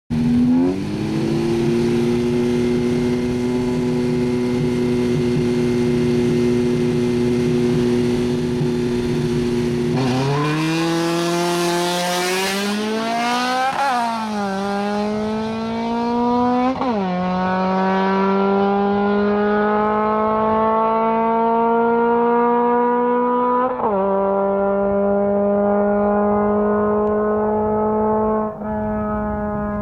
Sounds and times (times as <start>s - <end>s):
Vehicle: 0.1s - 29.8s.